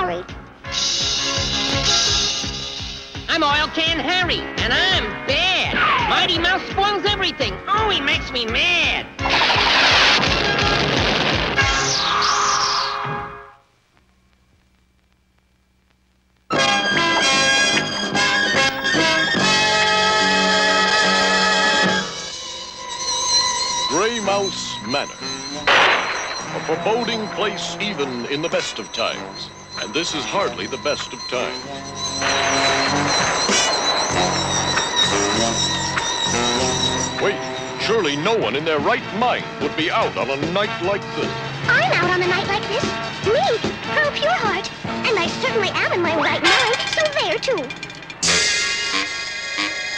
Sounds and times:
Music: 0.0s - 13.7s, 16.4s - 49.9s.

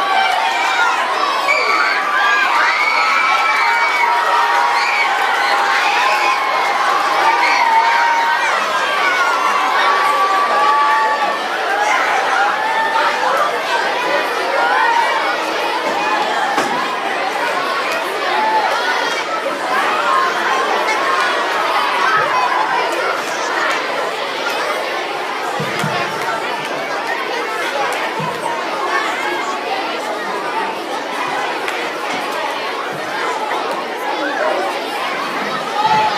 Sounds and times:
Speech: 0.0s - 36.1s.

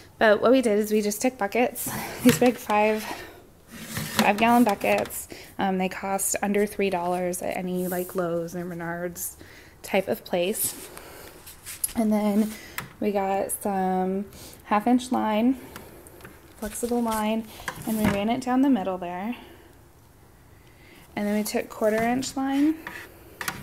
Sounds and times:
Speech: 4.2s - 10.7s, 12.0s - 15.6s, 16.6s - 19.4s, 21.2s - 22.8s.

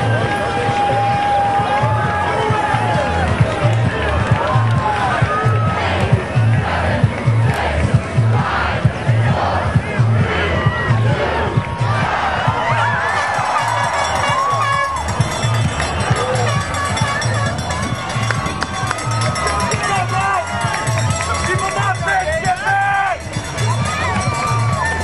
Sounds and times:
Crowd: 0.0s - 25.0s
Music: 0.0s - 25.0s
Outside, urban or manmade: 0.0s - 25.0s.

